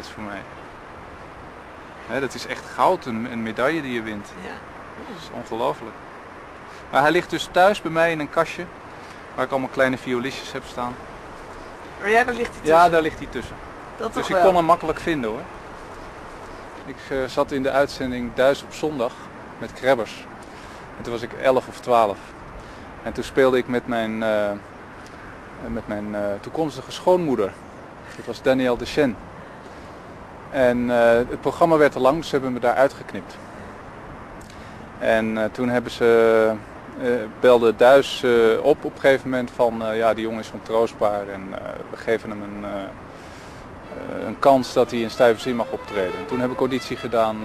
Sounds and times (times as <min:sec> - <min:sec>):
Speech: 0:00.0 - 0:00.5, 0:02.1 - 0:05.9, 0:06.9 - 0:08.7, 0:09.4 - 0:11.0, 0:12.0 - 0:15.5, 0:16.9 - 0:20.3, 0:21.0 - 0:22.3, 0:23.0 - 0:24.6, 0:25.6 - 0:27.6, 0:28.2 - 0:29.2, 0:30.6 - 0:33.4, 0:35.0 - 0:43.0, 0:43.9 - 0:47.4.